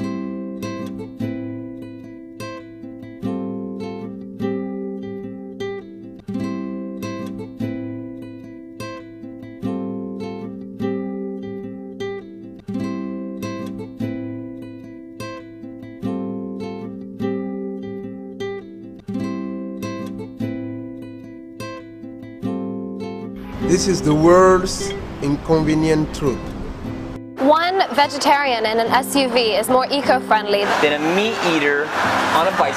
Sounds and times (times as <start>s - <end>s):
Music: 0.0s - 32.7s
Speech: 23.7s - 26.4s, 27.4s - 32.7s.